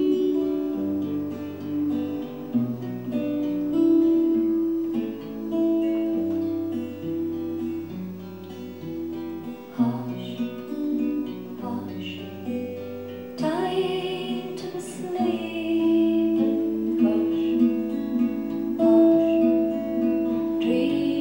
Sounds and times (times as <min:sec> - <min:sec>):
Music: 0:00.0 - 0:21.2.